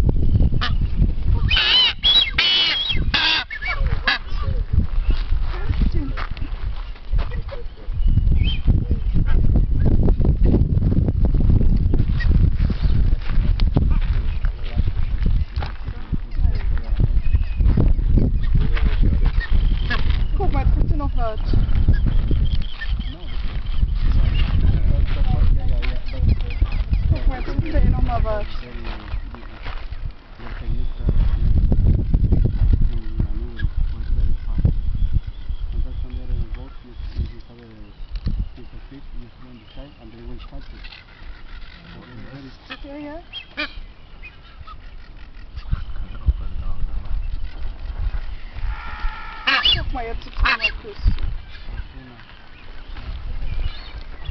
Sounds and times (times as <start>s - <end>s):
Bird: 0.3s - 9.9s, 13.9s - 31.5s, 32.2s - 54.3s.